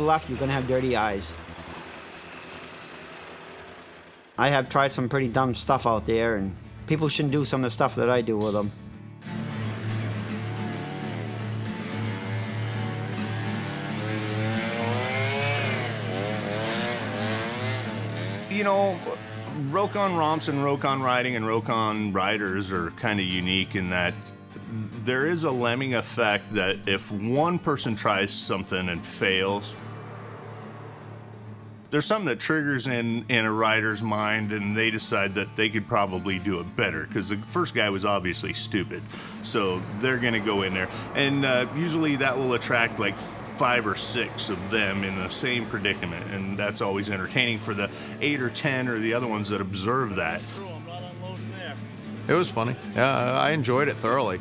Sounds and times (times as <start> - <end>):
Chainsaw: 0.0 - 4.8, 9.2 - 21.1, 39.0 - 49.4
Motorcycle: 0.0 - 6.8, 9.2 - 23.9, 24.5 - 38.2, 38.8 - 54.4.